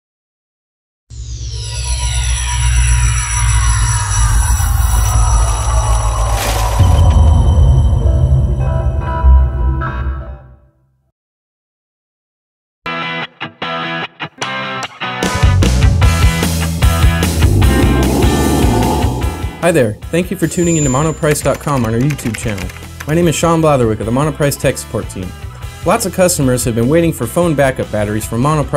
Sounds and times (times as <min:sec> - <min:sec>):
Music: 0:01.1 - 0:11.1, 0:12.9 - 0:28.7.